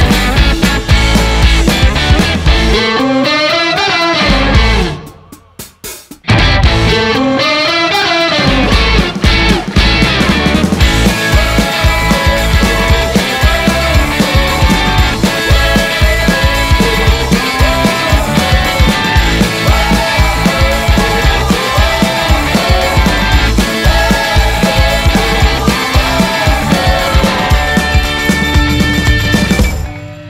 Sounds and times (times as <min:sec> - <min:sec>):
Dance music: 0:00.0 - 0:03.2, 0:08.4 - 0:29.8
Pop music: 0:00.0 - 0:05.3, 0:06.3 - 0:29.8
Theme music: 0:09.9 - 0:30.2.